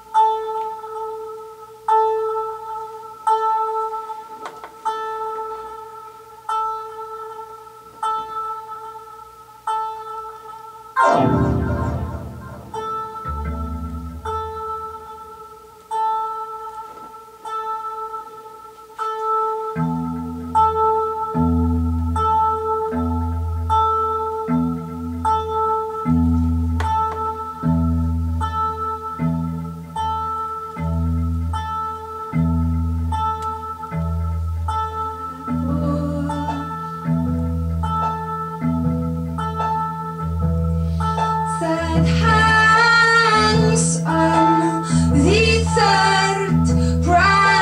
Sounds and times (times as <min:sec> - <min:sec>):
Theremin: 0:11.0 - 0:14.5.